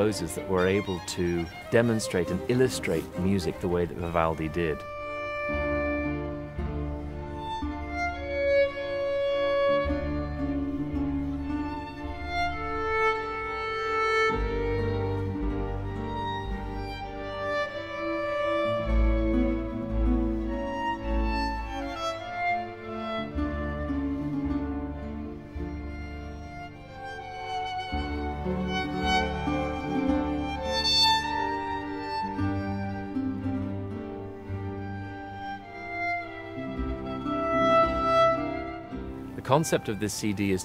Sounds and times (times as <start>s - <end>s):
Classical music: 0.0s - 40.6s
Violin, fiddle: 0.0s - 40.6s
Wedding music: 0.0s - 40.6s.